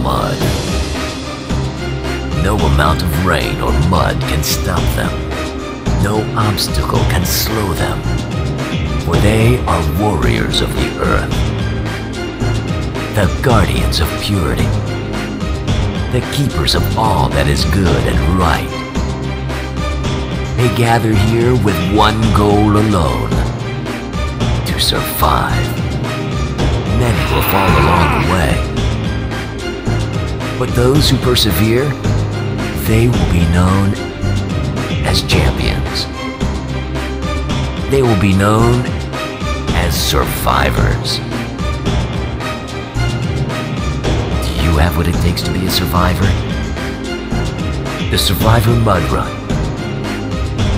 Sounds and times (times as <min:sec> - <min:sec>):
Speech: 0:00.0 - 0:00.6, 0:02.4 - 0:05.2, 0:06.0 - 0:08.1, 0:09.0 - 0:11.4, 0:13.1 - 0:14.8, 0:16.1 - 0:18.8, 0:20.6 - 0:23.4, 0:24.6 - 0:25.8, 0:26.9 - 0:28.7, 0:30.6 - 0:32.0, 0:32.8 - 0:34.1, 0:35.0 - 0:36.1, 0:37.9 - 0:39.0, 0:39.7 - 0:41.3, 0:44.4 - 0:46.5, 0:48.1 - 0:49.4
Music: 0:00.0 - 0:50.7.